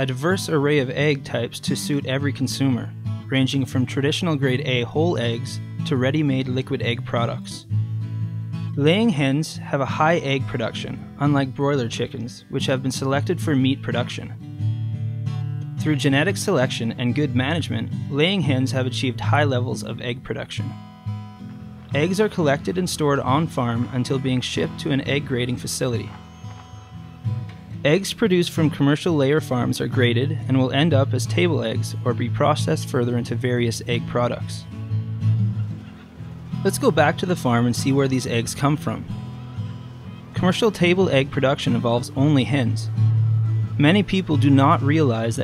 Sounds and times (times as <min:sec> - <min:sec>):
Speech: 0:00.0 - 0:07.6, 0:08.8 - 0:14.4, 0:15.8 - 0:20.7, 0:21.9 - 0:26.2, 0:27.8 - 0:34.7, 0:36.6 - 0:39.1, 0:40.4 - 0:42.9, 0:43.8 - 0:45.4
Music: 0:00.0 - 0:45.4.